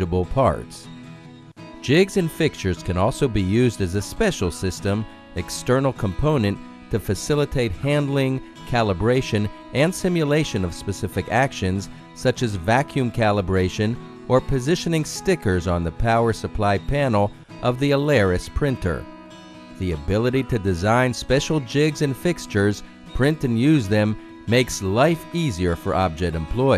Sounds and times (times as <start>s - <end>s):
Speech: 0.0s - 0.9s, 1.8s - 19.0s, 19.8s - 26.7s
Music: 0.0s - 26.7s.